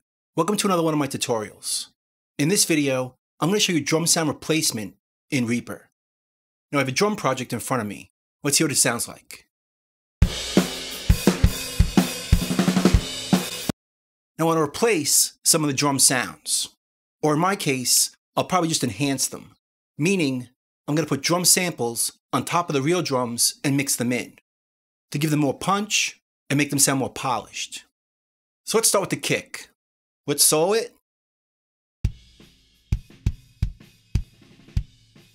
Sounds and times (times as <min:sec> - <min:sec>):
Speech: 0:00.4 - 0:05.9, 0:06.7 - 0:09.5, 0:14.4 - 0:24.4, 0:25.1 - 0:27.9, 0:28.7 - 0:31.0.